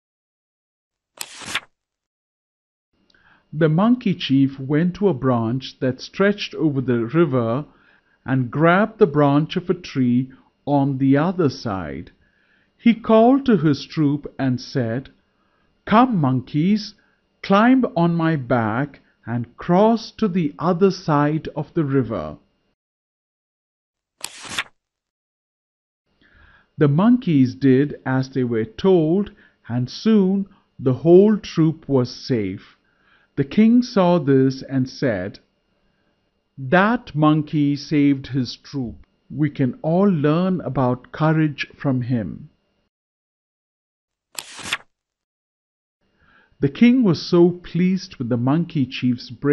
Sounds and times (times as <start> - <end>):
Speech: 3.5 - 12.2, 12.8 - 15.2, 15.9 - 22.5, 26.8 - 32.8, 33.4 - 35.5, 36.6 - 42.6, 46.6 - 49.5.